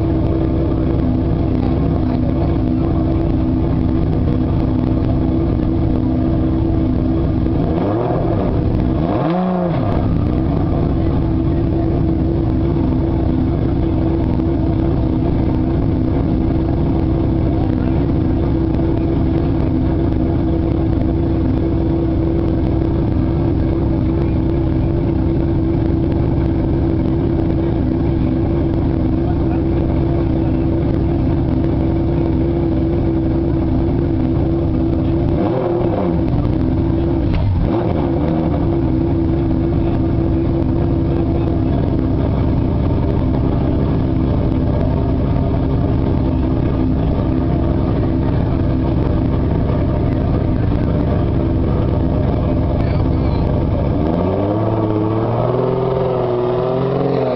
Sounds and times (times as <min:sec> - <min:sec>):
Speech: 0:01.4 - 0:04.6, 0:17.4 - 0:19.8, 0:29.0 - 0:31.5, 0:52.4 - 0:53.6.